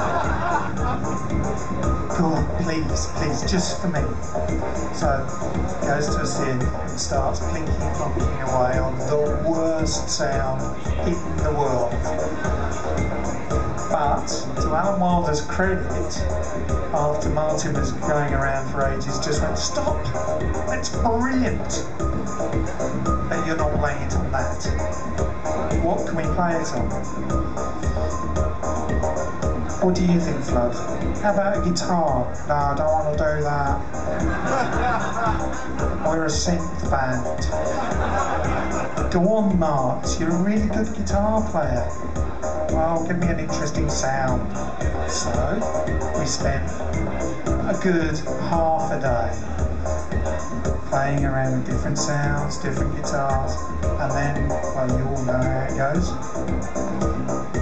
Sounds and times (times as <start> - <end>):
Music: 0.0 - 57.6
Speech: 2.1 - 4.2, 4.9 - 12.1, 13.9 - 21.9, 23.3 - 25.0, 25.8 - 27.0, 29.8 - 33.8, 36.0 - 37.6, 39.0 - 42.0, 42.7 - 46.8, 47.6 - 49.5, 50.9 - 56.2.